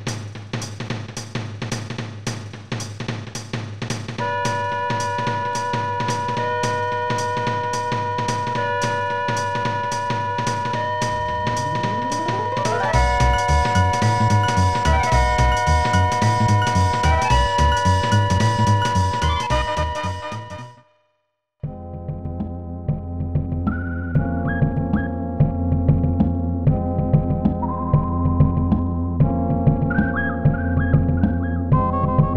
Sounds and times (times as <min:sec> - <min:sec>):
Music: 0:00.0 - 0:32.3.